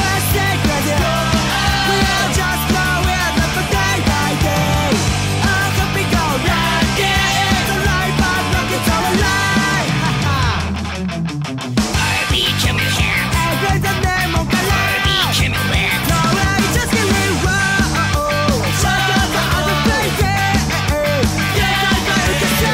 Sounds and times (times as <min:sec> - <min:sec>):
Disco: 0:00.0 - 0:10.9, 0:12.0 - 0:22.7
Blues: 0:00.0 - 0:22.7.